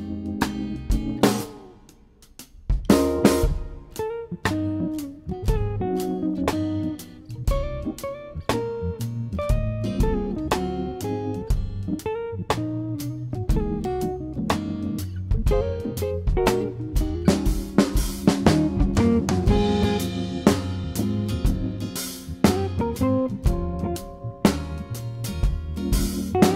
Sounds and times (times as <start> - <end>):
Electric guitar: 0.0 - 2.0, 2.8 - 26.5
Strum: 2.8 - 26.5.